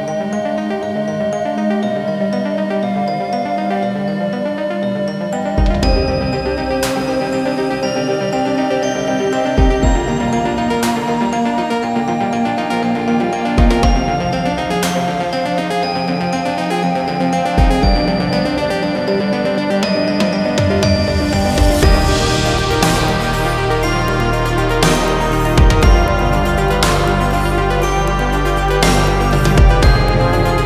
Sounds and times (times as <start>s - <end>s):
Music: 0.0s - 30.6s.